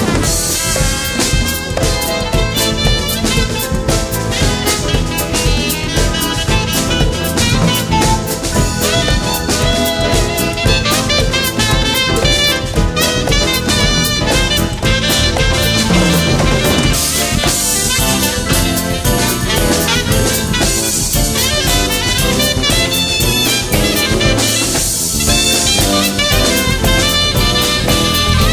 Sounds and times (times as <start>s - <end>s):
Brass instrument: 0.0s - 28.5s
Saxophone: 0.0s - 28.5s.